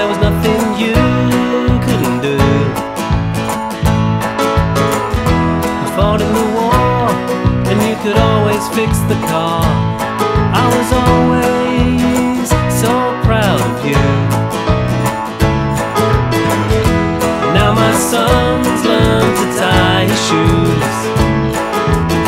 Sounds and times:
Music: 0.0 - 22.2.

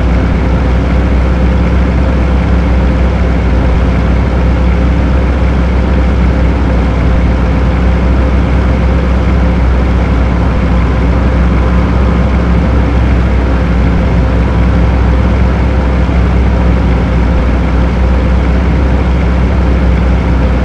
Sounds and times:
Truck: 0.0 - 20.6.

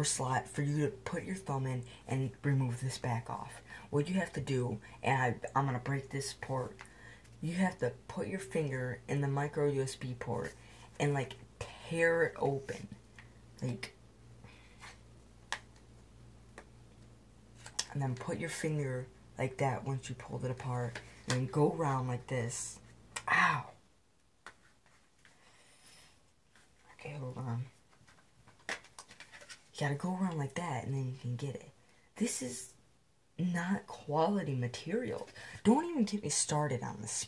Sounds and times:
Speech: 0.0 - 6.8, 7.4 - 13.0, 13.6 - 14.0, 17.8 - 23.8, 26.9 - 27.8, 29.7 - 32.8, 33.4 - 37.2.

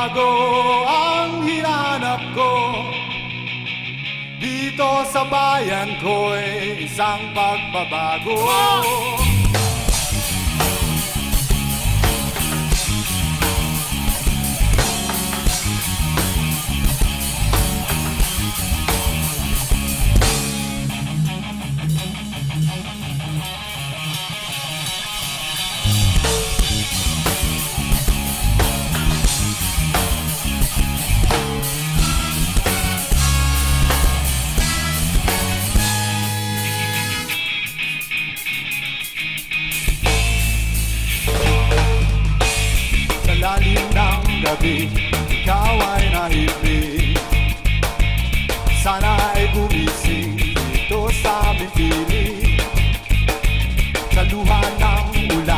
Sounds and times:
Music: 0.0 - 55.5.

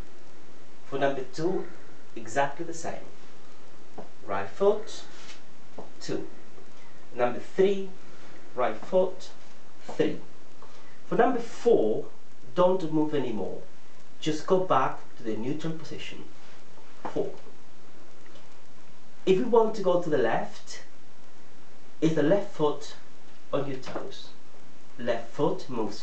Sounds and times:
Speech: 0.9 - 3.2, 4.2 - 5.2, 5.9 - 6.4, 7.2 - 8.0, 8.6 - 10.3, 11.1 - 16.4, 17.0 - 17.5, 19.2 - 20.9, 22.0 - 24.4, 25.0 - 26.0.

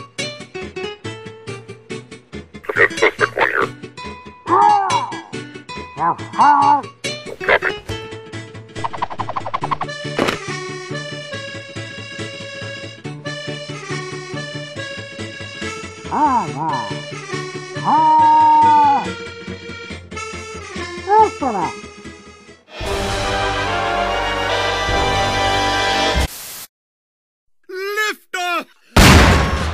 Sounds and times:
Music: 0.0 - 26.3
Outside, urban or manmade: 0.0 - 26.5.

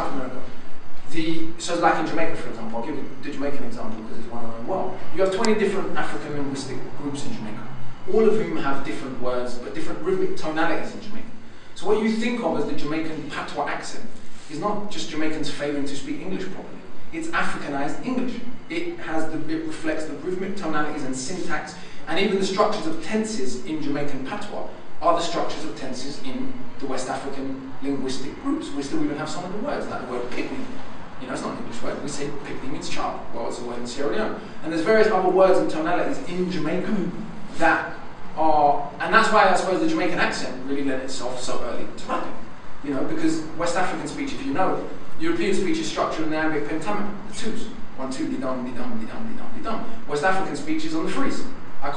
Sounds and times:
Male speech, man speaking: 0.0 - 51.9
Narration, monologue: 0.0 - 51.9.

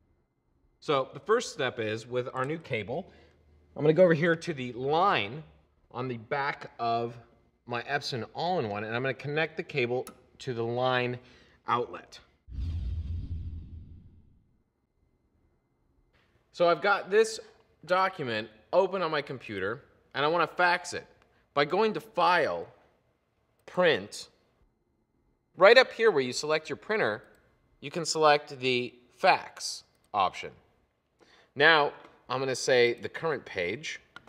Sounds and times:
Speech: 0.8 - 3.1, 3.8 - 12.4, 16.5 - 22.8, 23.7 - 24.4, 25.6 - 30.7, 31.6 - 34.1.

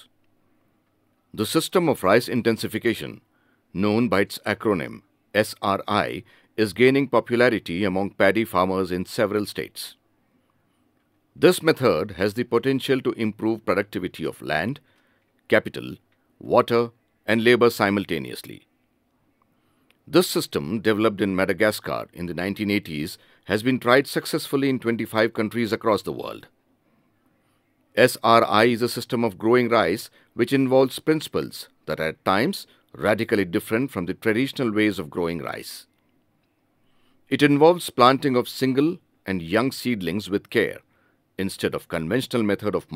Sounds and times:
Speech: 1.4 - 10.0, 11.4 - 14.8, 15.5 - 18.7, 20.1 - 26.5, 28.0 - 35.9, 37.3 - 42.9.

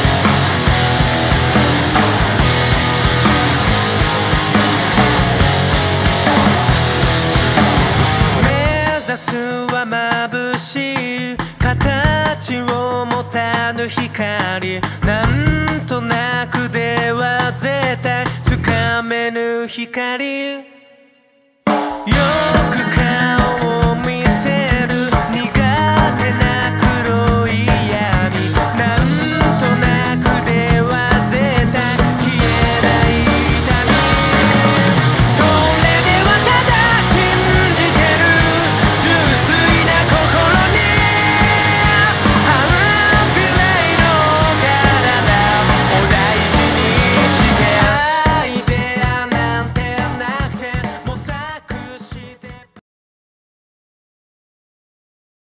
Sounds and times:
Music: 0.0 - 52.8.

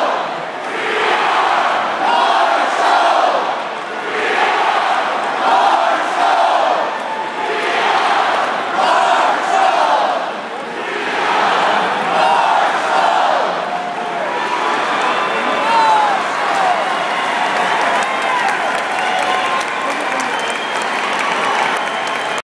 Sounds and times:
Speech: 14.0 - 16.8, 19.6 - 20.6.

